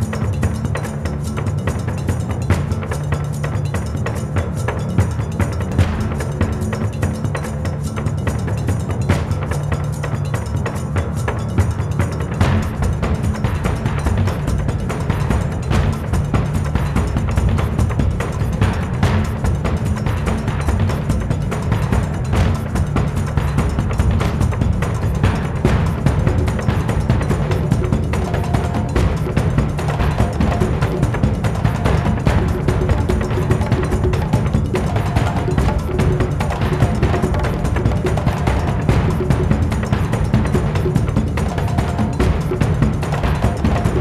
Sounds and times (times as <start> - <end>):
Background music: 0.0 - 44.0.